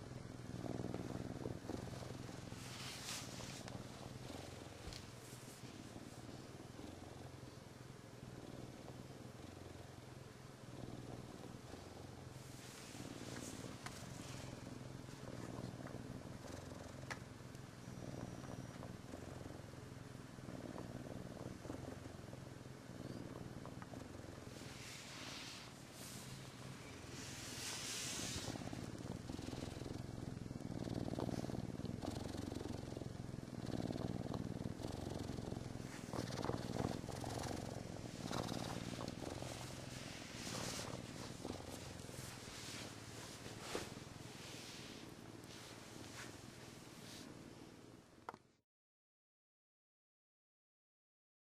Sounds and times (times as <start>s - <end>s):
Purr: 0.0s - 48.6s.